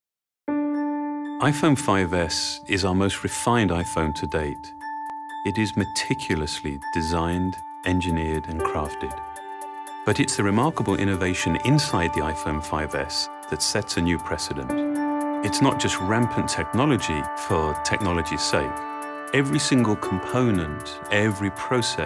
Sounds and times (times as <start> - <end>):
Glockenspiel: 3.5 - 22.0.